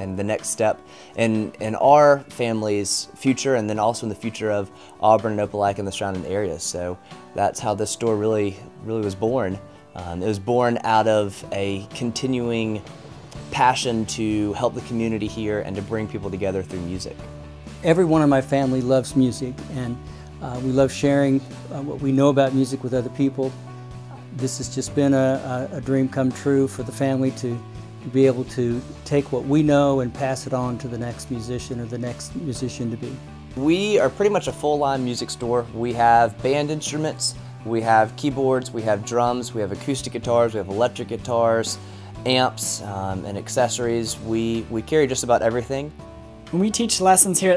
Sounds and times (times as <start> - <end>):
Speech: 0.0 - 12.8, 13.4 - 45.9, 46.5 - 47.5
Background music: 0.0 - 47.5.